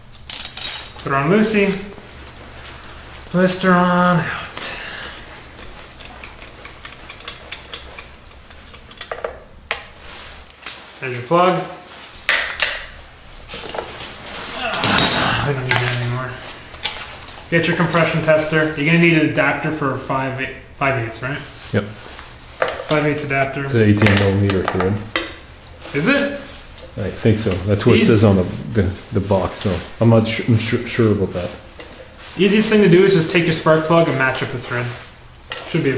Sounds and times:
Speech: 1.0s - 2.0s, 3.3s - 4.8s, 11.0s - 11.8s, 14.6s - 16.4s, 17.5s - 22.0s, 22.9s - 25.1s, 25.9s - 31.6s, 32.4s - 35.1s, 35.7s - 35.9s.

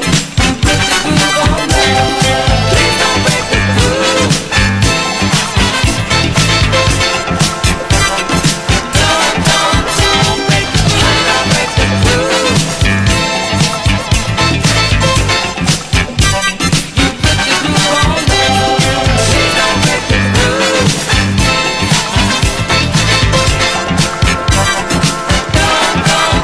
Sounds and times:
Funk: 0.0s - 26.4s.

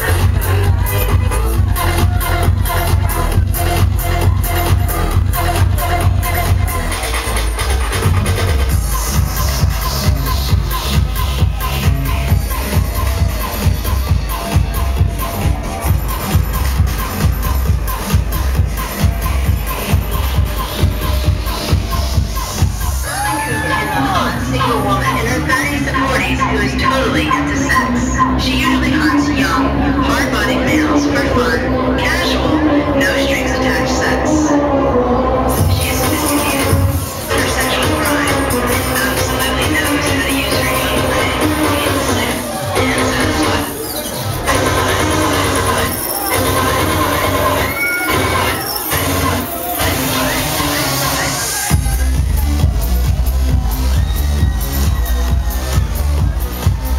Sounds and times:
Music: 0.0s - 56.9s
Speech: 23.2s - 34.7s, 35.6s - 43.8s.

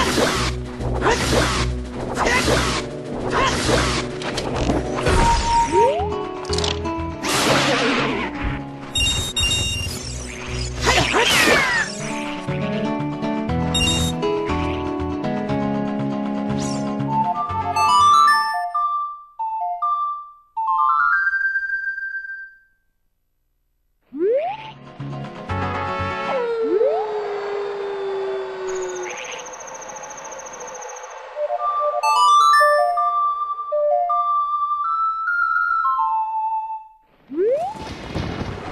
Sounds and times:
Outside, rural or natural: 0.0s - 17.8s, 24.0s - 34.3s, 37.0s - 38.7s
Music: 0.0s - 22.7s, 24.6s - 26.5s, 29.0s - 37.1s.

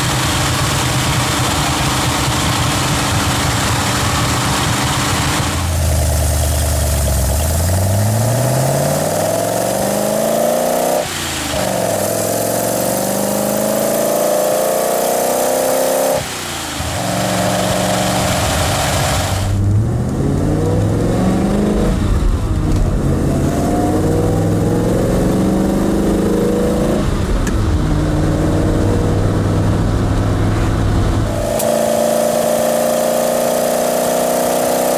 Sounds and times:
Car: 0.0s - 34.9s.

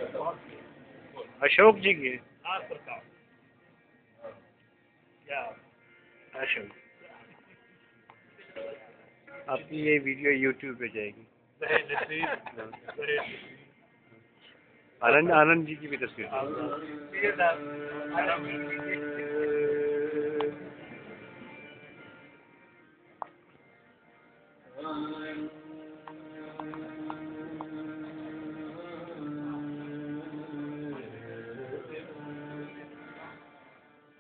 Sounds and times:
Speech: 9.5s - 13.6s, 15.0s - 18.7s.

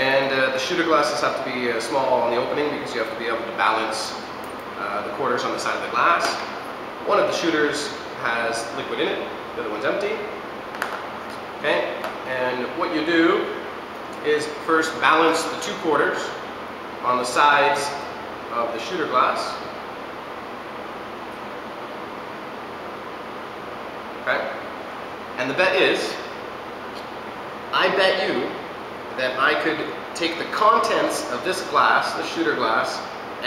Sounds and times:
Speech: 0.0s - 4.2s, 4.8s - 10.3s, 11.6s - 13.6s, 14.2s - 16.4s, 17.0s - 19.7s, 24.2s - 24.6s, 25.4s - 26.3s, 27.7s - 28.6s, 29.2s - 33.4s.

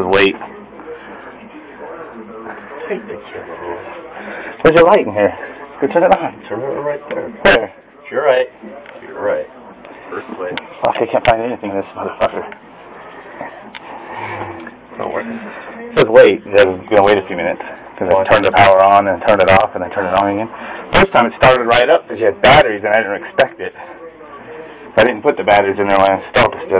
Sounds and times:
Speech: 15.0s - 26.7s.

